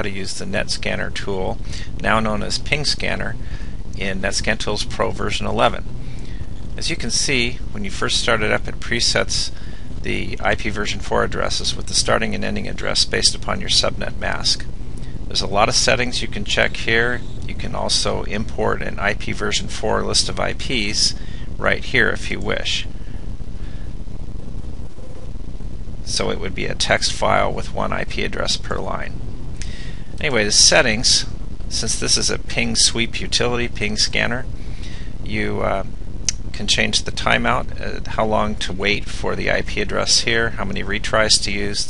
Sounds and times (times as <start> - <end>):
Speech: 0.0 - 5.8, 6.8 - 14.7, 15.3 - 22.9, 26.0 - 29.2, 30.2 - 34.5, 35.2 - 41.8.